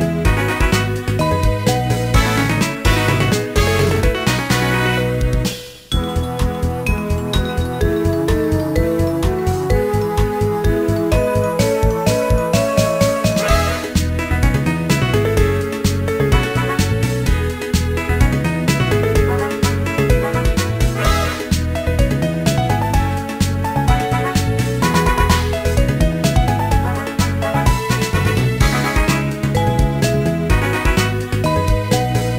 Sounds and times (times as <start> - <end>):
Video game music: 0.0 - 32.3
Theme music: 0.1 - 32.3.